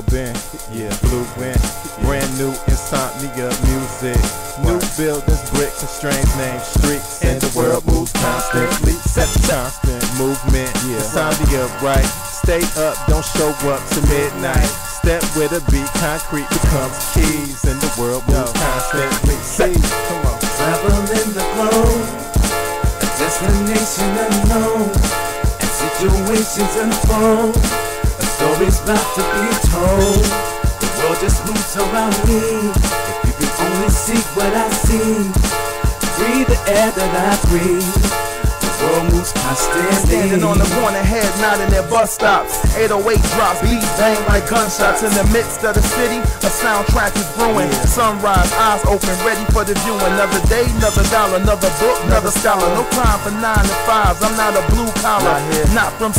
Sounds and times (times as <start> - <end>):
Rhythm and blues: 0.0 - 56.1.